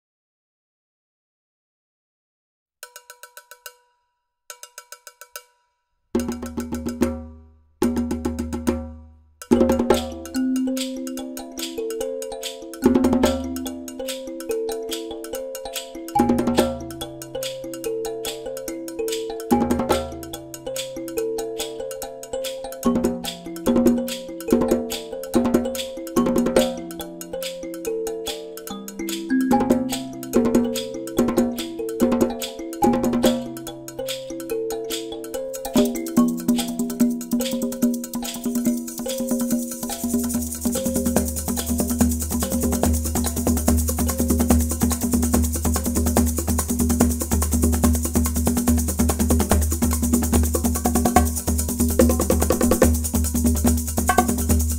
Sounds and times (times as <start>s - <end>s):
Music: 2.8s - 54.7s.